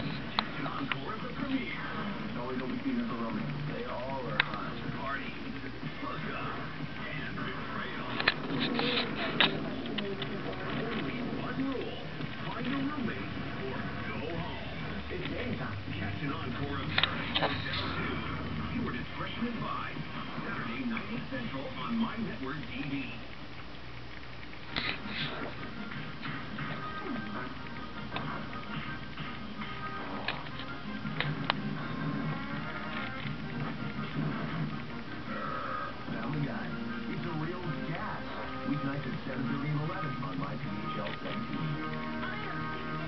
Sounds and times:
Patter: 0.0 - 15.8, 16.5 - 43.0.

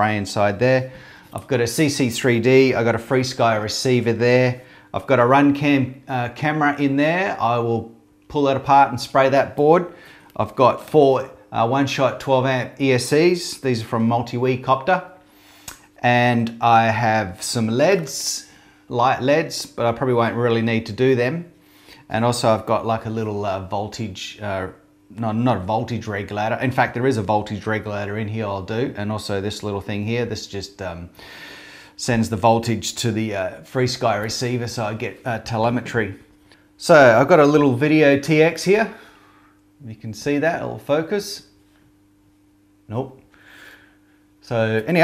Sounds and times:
Speech: 0.0 - 15.2, 16.0 - 31.2, 32.0 - 39.0, 39.8 - 41.6, 42.9 - 43.2, 44.4 - 45.0.

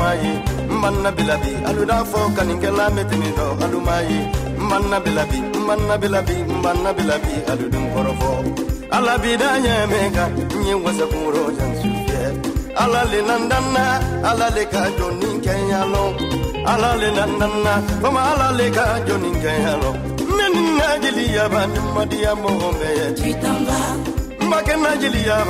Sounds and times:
Dance music: 0.0 - 25.4
Exciting music: 0.0 - 25.4.

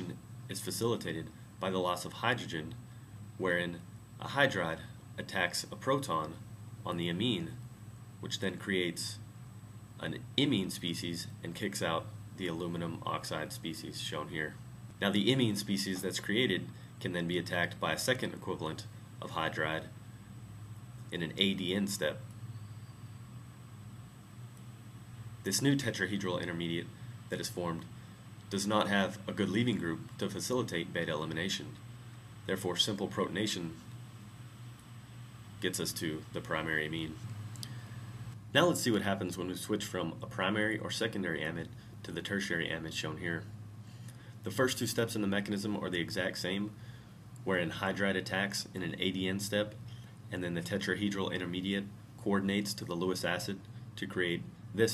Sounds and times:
Speech: 0.0 - 2.8, 3.4 - 7.6, 8.2 - 9.2, 10.0 - 20.0, 21.1 - 22.3, 25.4 - 31.8, 32.5 - 33.9, 35.6 - 37.3, 38.5 - 43.5, 44.4 - 46.8, 47.4 - 54.9.

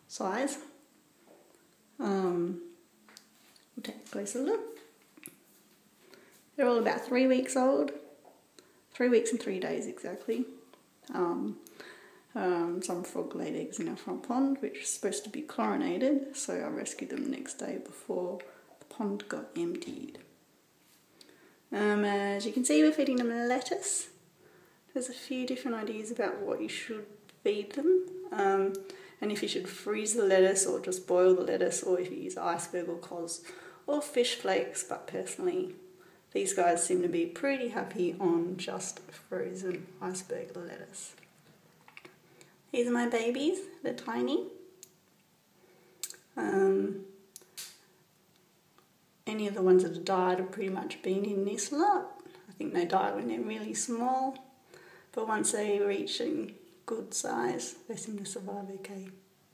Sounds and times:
Speech: 0.0 - 0.8, 2.0 - 2.7, 3.8 - 4.9, 6.6 - 8.1, 9.0 - 11.6, 12.3 - 20.3, 21.7 - 24.2, 24.9 - 41.2, 42.7 - 44.6, 46.1 - 47.1, 49.2 - 54.4, 55.2 - 59.2.

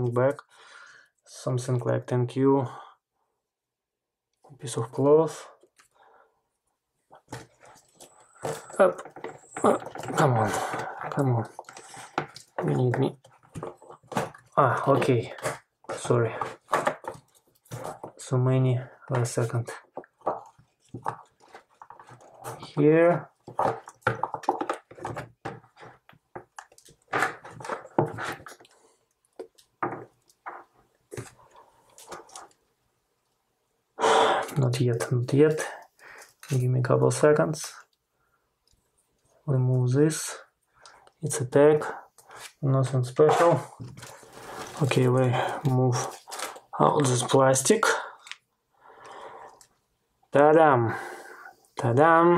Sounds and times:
Inside, small room: 0.0 - 52.3.

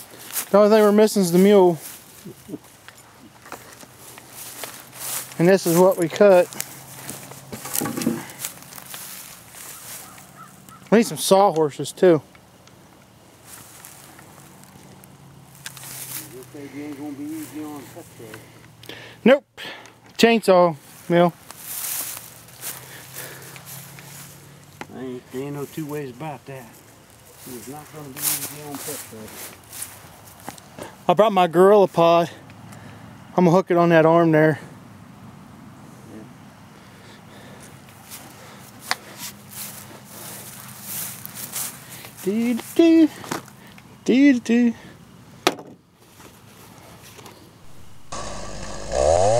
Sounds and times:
Speech: 0.5 - 1.8, 5.4 - 6.5, 10.9 - 12.2, 16.2 - 18.4, 24.9 - 26.8, 27.4 - 29.4, 31.1 - 32.4, 33.4 - 34.7, 42.2 - 43.2, 44.0 - 44.8.

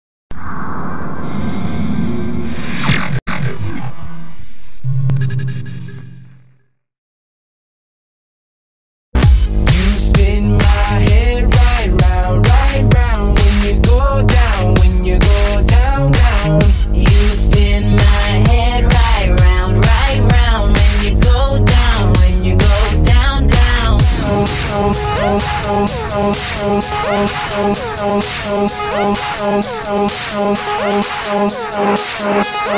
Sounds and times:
Disco: 9.2 - 32.7
Electronic music: 9.2 - 32.7.

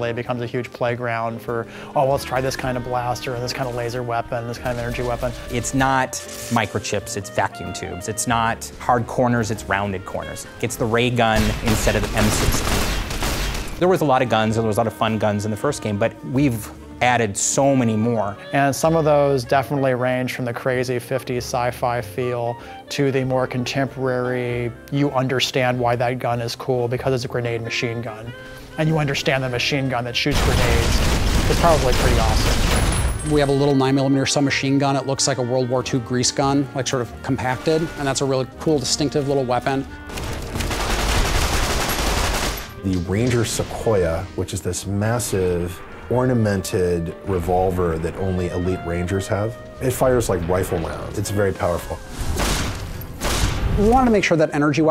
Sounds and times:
Speech: 0.0 - 12.6, 13.8 - 32.6, 33.2 - 39.8, 42.8 - 52.0, 53.8 - 54.9
Music: 0.0 - 54.9.

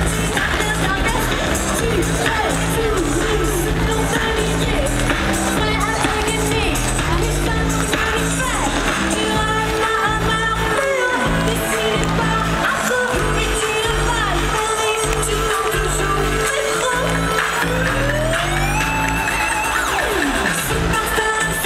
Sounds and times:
Music: 0.0 - 21.6.

